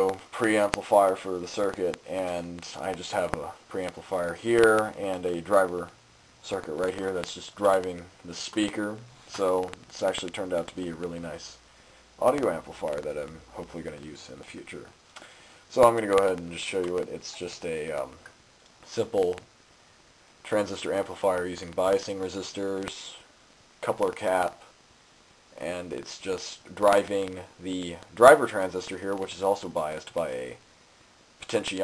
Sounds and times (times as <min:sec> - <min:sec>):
Speech: 0:00.0 - 0:15.0, 0:15.7 - 0:19.5, 0:20.4 - 0:24.8, 0:25.6 - 0:30.6, 0:31.4 - 0:31.8.